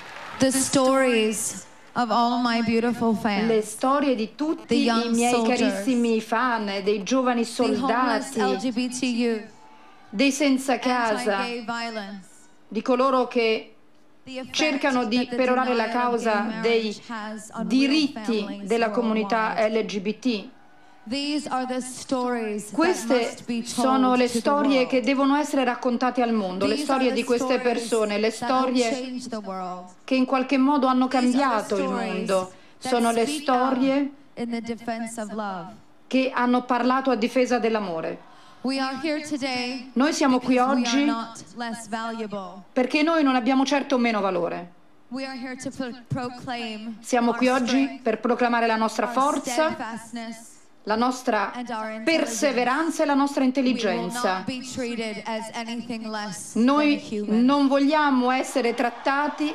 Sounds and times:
Narration, monologue: 0.3s - 59.5s
Female speech, woman speaking: 0.4s - 59.5s.

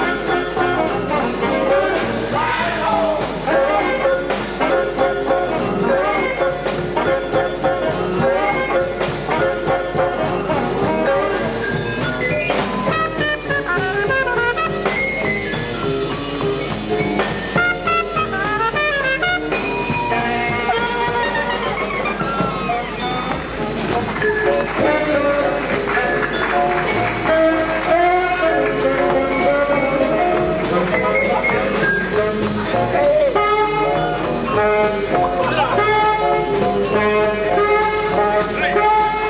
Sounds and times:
Jazz: 0.0s - 39.2s.

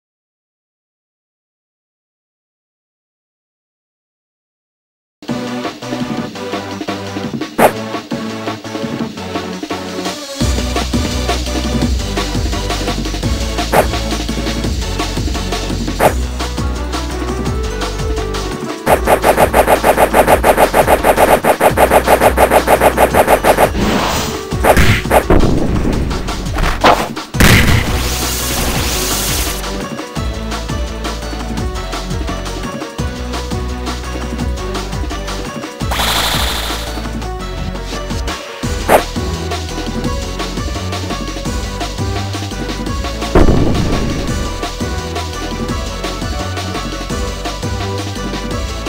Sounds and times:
Music: 5.2s - 48.8s.

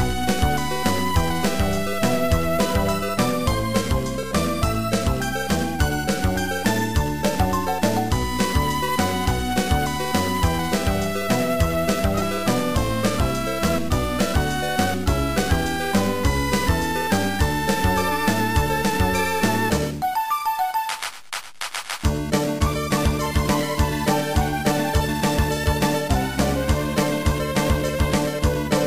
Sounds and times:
Soundtrack music: 0.0s - 28.8s.

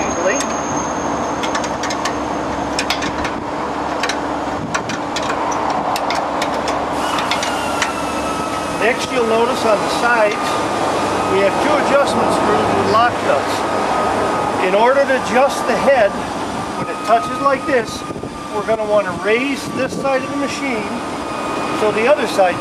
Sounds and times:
Speech: 0.0s - 0.5s, 8.8s - 10.6s, 11.3s - 13.6s, 14.6s - 16.2s, 16.8s - 21.0s, 21.8s - 22.6s.

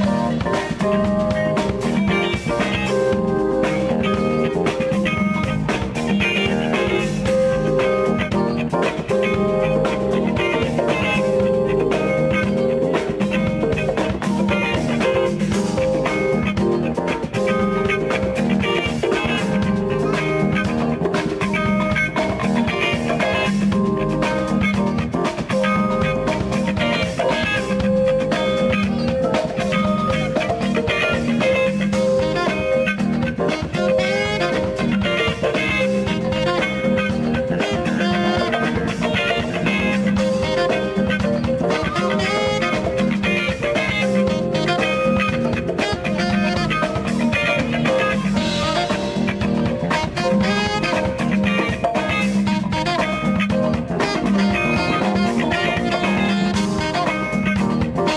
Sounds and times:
Music: 0.0s - 58.1s.

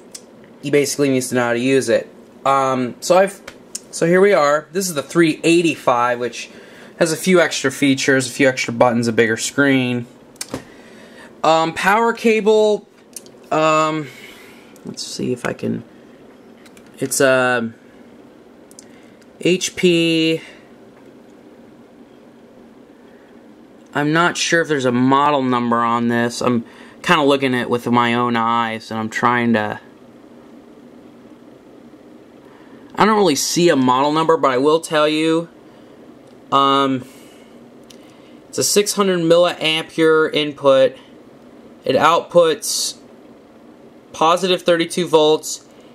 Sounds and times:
Speech: 0.6s - 10.2s, 11.4s - 12.9s, 13.5s - 14.2s, 14.8s - 15.9s, 17.0s - 17.8s, 19.4s - 20.6s, 23.9s - 29.9s, 32.9s - 35.6s, 36.5s - 37.2s, 38.5s - 41.1s, 41.8s - 43.1s, 44.1s - 45.7s.

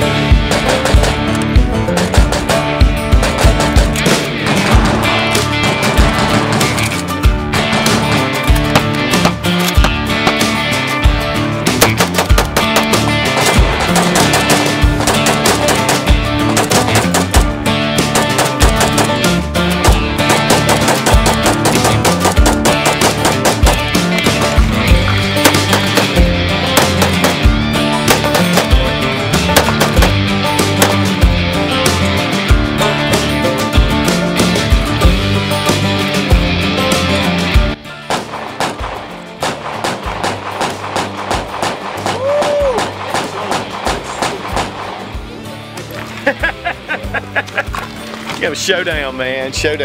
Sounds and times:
Music: 0.0s - 49.8s
Outside, rural or natural: 0.0s - 49.8s.

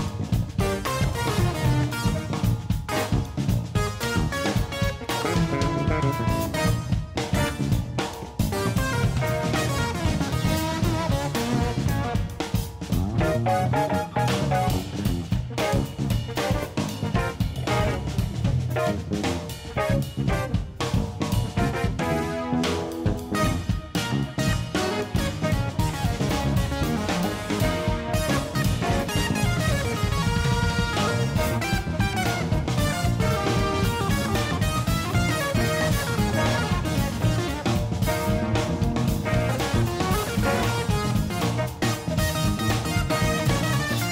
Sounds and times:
Music: 0.0s - 44.1s.

